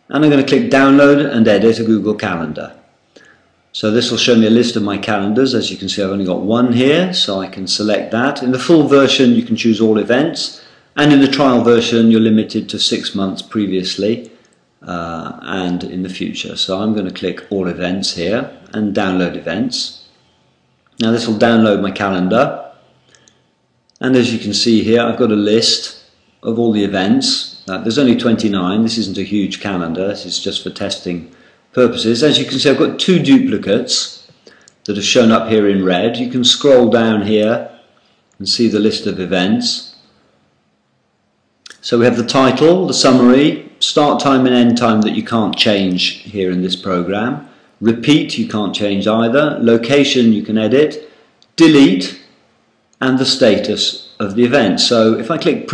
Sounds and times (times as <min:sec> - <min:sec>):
Speech: 0:00.0 - 0:02.8, 0:03.7 - 0:20.1, 0:21.0 - 0:22.8, 0:24.0 - 0:37.8, 0:38.4 - 0:40.1, 0:41.7 - 0:52.4, 0:53.0 - 0:55.7.